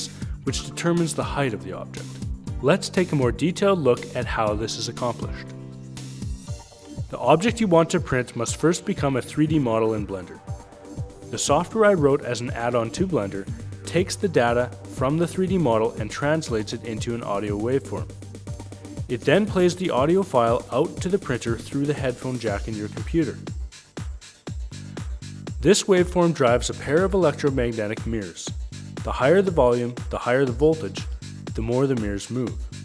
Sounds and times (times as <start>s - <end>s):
Speech: 0.0s - 5.5s, 7.1s - 10.4s, 11.3s - 18.1s, 19.1s - 23.5s, 25.6s - 32.6s
Music: 0.0s - 32.8s.